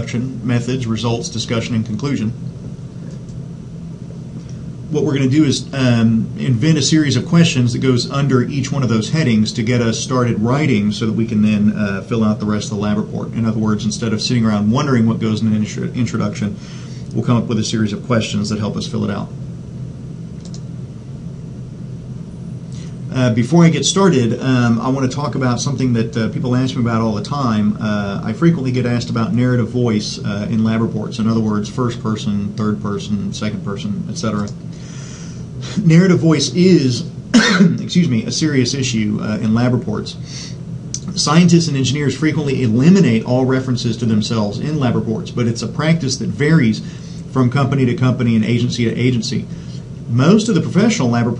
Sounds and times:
Speech: 0:00.0 - 0:02.4, 0:04.9 - 0:19.4, 0:23.1 - 0:34.6, 0:35.8 - 0:40.2, 0:41.0 - 0:49.5, 0:50.1 - 0:51.3.

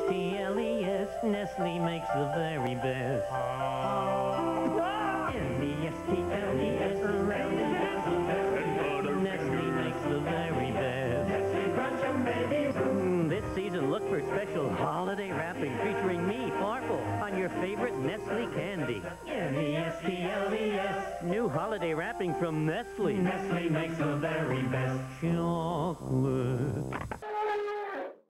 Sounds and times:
Music: 0:00.0 - 0:27.6.

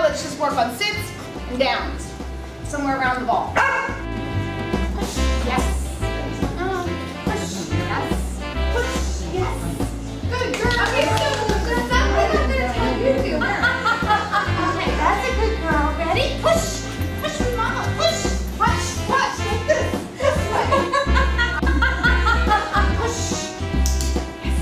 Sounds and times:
Music: 0:00.0 - 0:24.6.

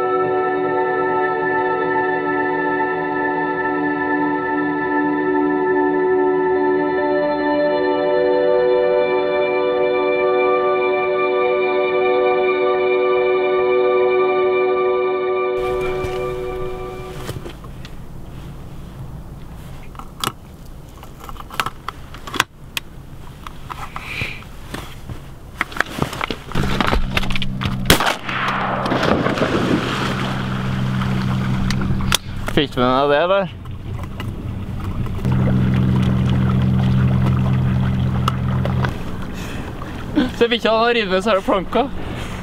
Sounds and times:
Music: 0:00.0 - 0:17.4.

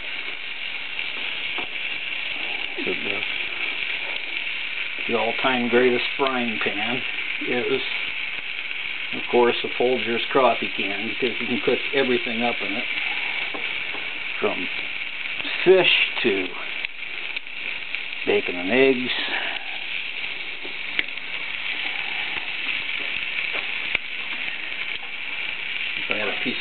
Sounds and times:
Fire: 0:00.0 - 0:26.6
Speech: 0:02.8 - 0:03.2, 0:05.1 - 0:08.0, 0:09.2 - 0:12.9, 0:14.4 - 0:14.7, 0:15.4 - 0:16.7, 0:18.3 - 0:19.4, 0:26.1 - 0:26.6.

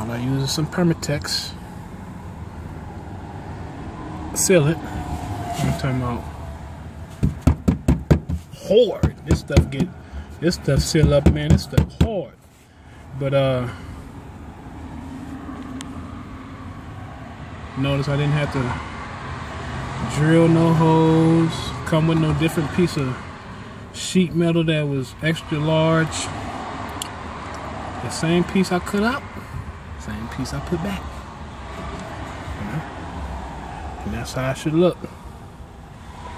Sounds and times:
Speech: 0:00.0 - 0:01.6, 0:04.4 - 0:04.8, 0:05.6 - 0:06.3, 0:08.6 - 0:12.4, 0:13.2 - 0:13.8, 0:17.8 - 0:18.8, 0:20.0 - 0:23.2, 0:24.0 - 0:26.3, 0:28.0 - 0:29.3, 0:30.0 - 0:31.1, 0:32.6 - 0:32.9, 0:34.0 - 0:35.1.

